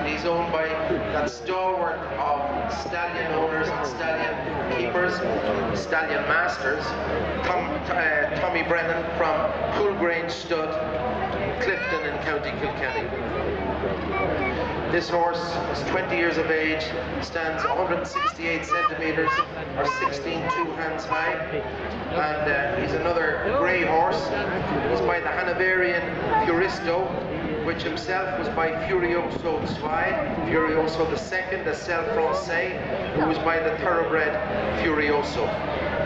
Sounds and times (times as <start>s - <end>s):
Speech: 0.0s - 10.8s, 11.6s - 13.4s, 14.1s - 35.6s.